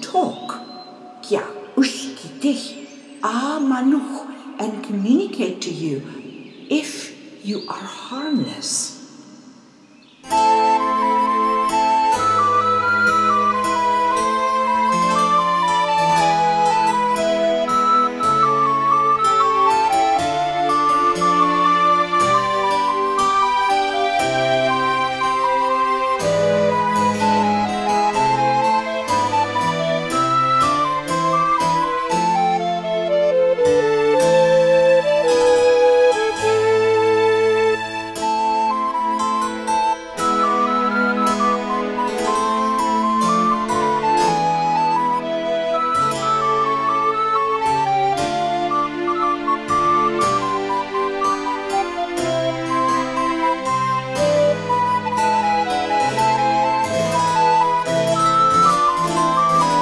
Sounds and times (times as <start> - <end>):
Music: 0.0 - 7.8, 9.2 - 59.8.